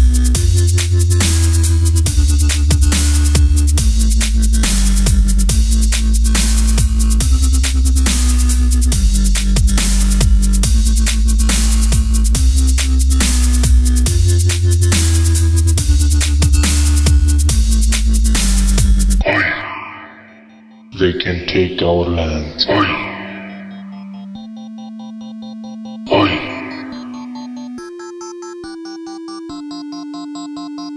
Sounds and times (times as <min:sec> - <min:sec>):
Drum and bass: 0:00.0 - 0:19.6, 0:22.7 - 0:30.9
Hip hop music: 0:00.0 - 0:30.9
Speech: 0:19.2 - 0:19.9, 0:21.0 - 0:23.6, 0:26.1 - 0:27.0.